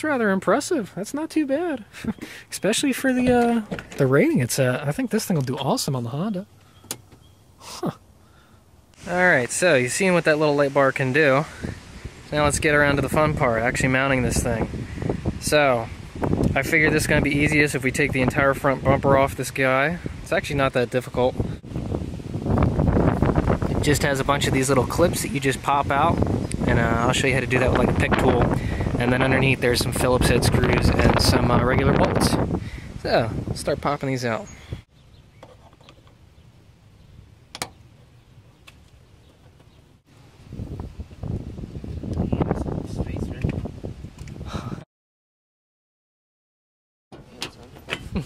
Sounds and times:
Wind noise (microphone): 11.4s - 34.8s, 40.4s - 44.8s, 47.9s - 48.2s.

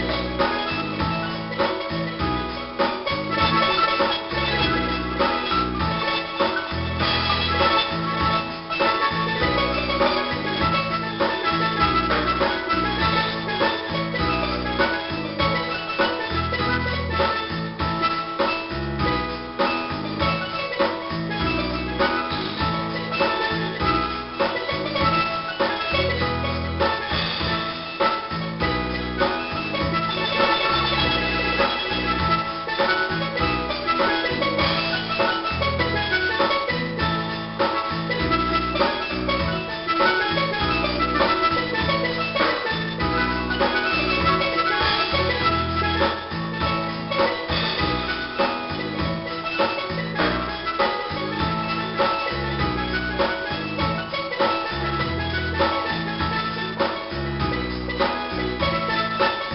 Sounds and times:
Bass drum: 0.0s - 59.5s
Drum kit: 0.0s - 59.5s.

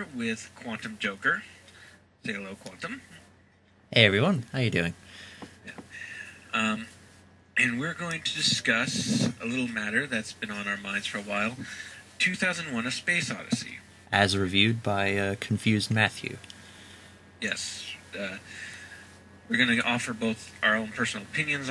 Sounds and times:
Speech: 0.0s - 1.5s, 2.2s - 3.2s, 4.0s - 5.0s, 5.7s - 6.9s, 7.6s - 16.5s, 17.4s - 18.7s, 19.5s - 21.7s.

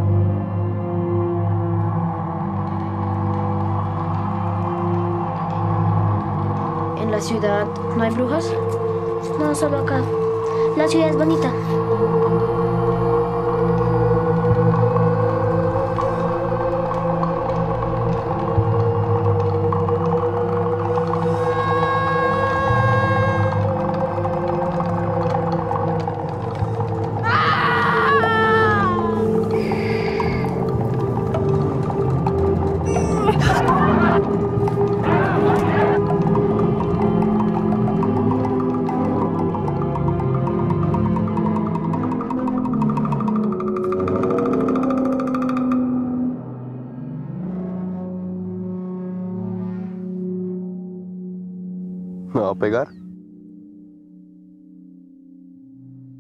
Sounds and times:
Music: 0.0s - 56.2s.

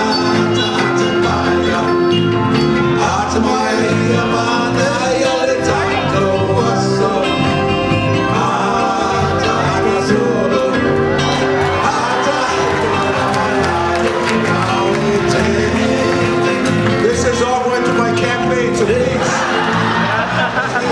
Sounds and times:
Male singing: 0.0s - 2.3s, 2.9s - 7.6s, 8.2s - 11.0s, 11.8s - 19.5s
Music: 0.0s - 20.9s.

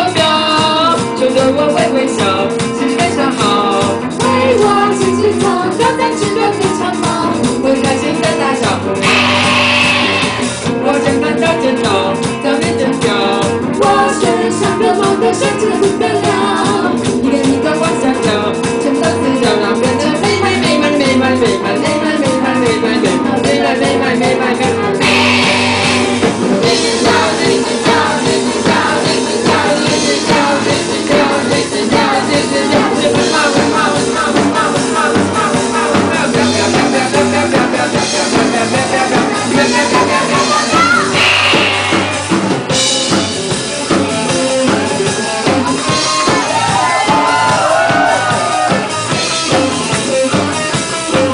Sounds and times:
Music: 0.0s - 51.3s.

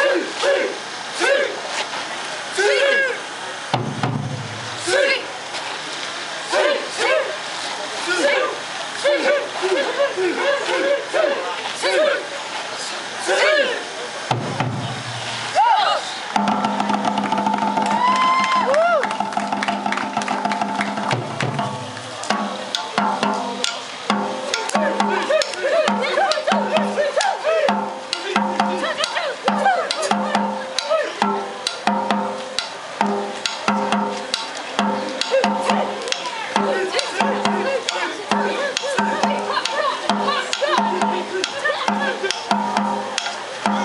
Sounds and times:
Outside, urban or manmade: 0.0s - 43.8s
Music: 16.4s - 43.8s.

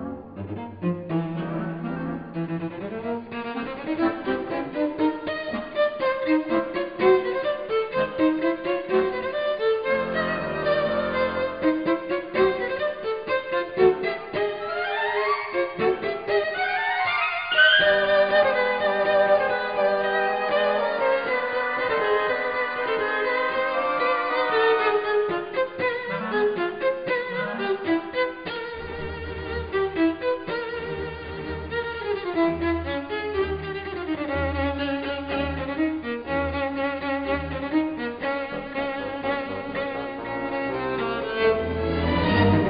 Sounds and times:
Violin, fiddle: 0.0s - 42.6s.

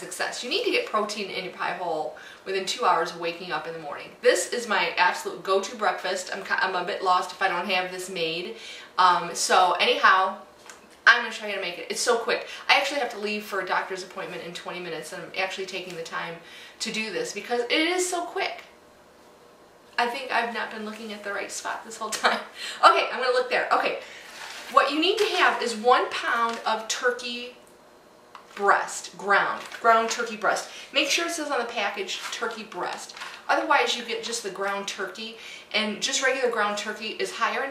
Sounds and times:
Speech: 0.0s - 18.7s, 20.0s - 27.6s, 28.5s - 37.7s.

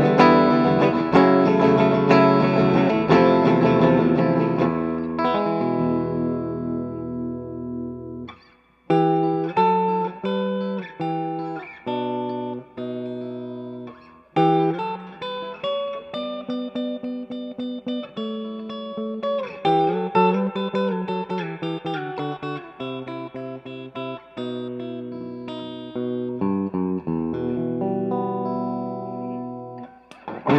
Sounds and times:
Electric guitar: 0.0s - 30.5s.

